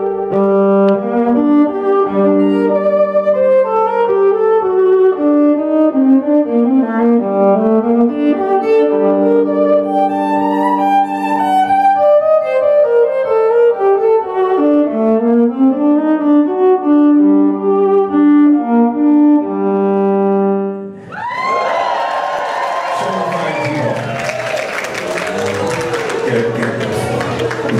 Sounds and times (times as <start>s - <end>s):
Violin, fiddle: 0.0s - 19.0s.